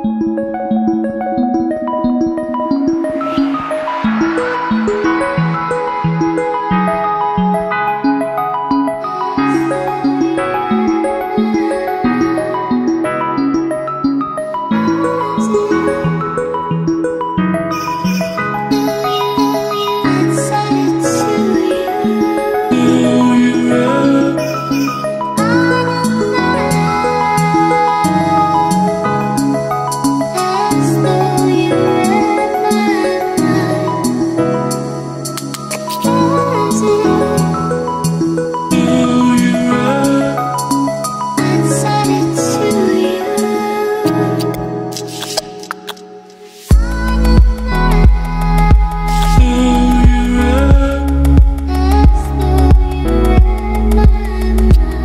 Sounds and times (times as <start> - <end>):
New-age music: 0.0 - 55.0.